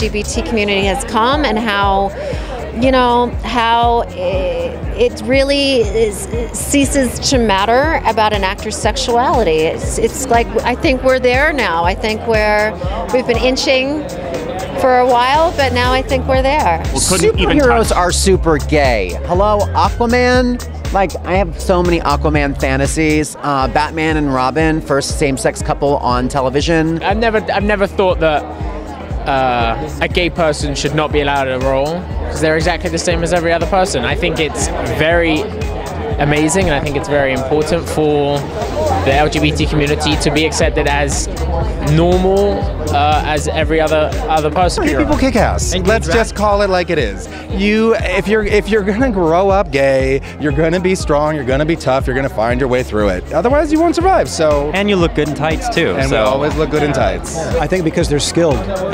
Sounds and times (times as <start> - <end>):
Speech: 0.0 - 14.0, 14.8 - 28.4, 36.2 - 58.9
Music: 0.0 - 58.9.